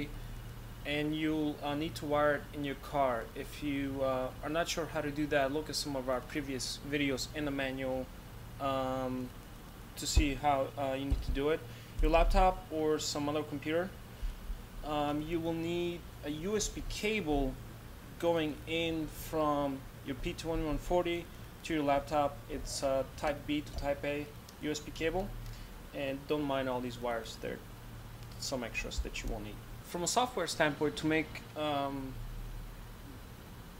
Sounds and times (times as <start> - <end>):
Speech: 0.8 - 9.4, 10.0 - 14.0, 14.8 - 17.6, 18.2 - 25.4, 26.0 - 27.6, 28.4 - 32.2.